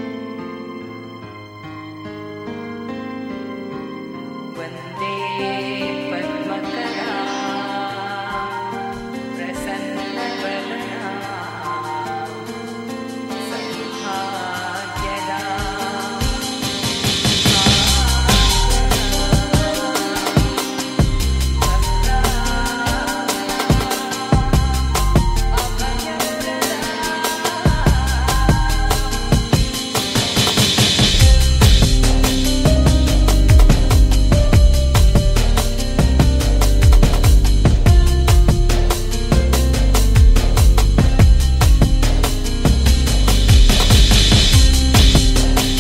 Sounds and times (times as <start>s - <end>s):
Music: 0.0s - 45.8s.